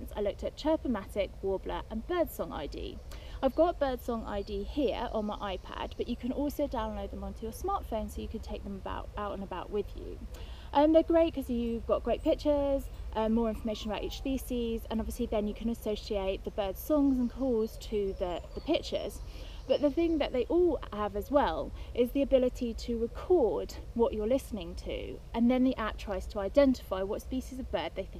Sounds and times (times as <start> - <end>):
Speech: 0.0 - 28.1.